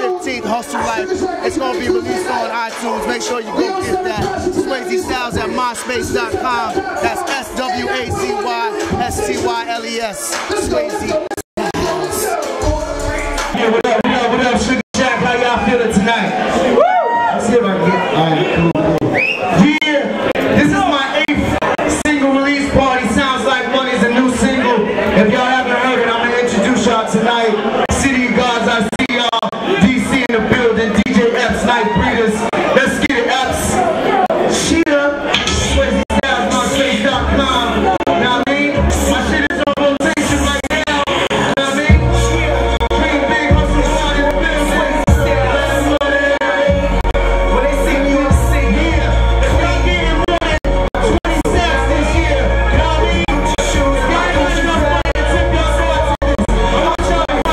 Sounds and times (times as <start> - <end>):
Speech: 0.0 - 12.3
Music: 0.0 - 16.8, 35.3 - 57.5
Crowd: 0.0 - 57.5
Hubbub, speech noise, speech babble: 0.0 - 57.5
Screaming: 16.7 - 17.4.